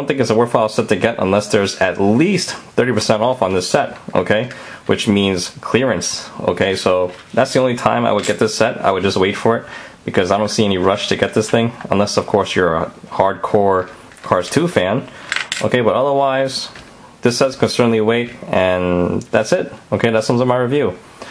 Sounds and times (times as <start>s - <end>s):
Speech: 0.0s - 21.0s.